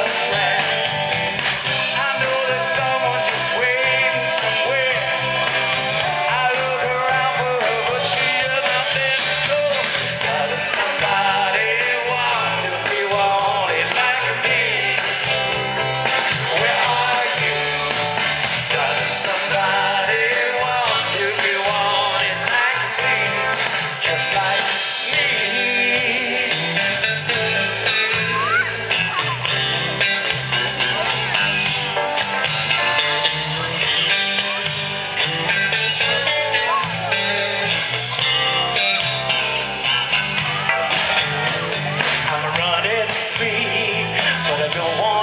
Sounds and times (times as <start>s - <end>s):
Male singing: 0.0s - 1.0s, 1.7s - 15.6s, 16.4s - 28.3s, 33.6s - 38.0s, 42.0s - 45.2s
Music: 0.0s - 45.2s.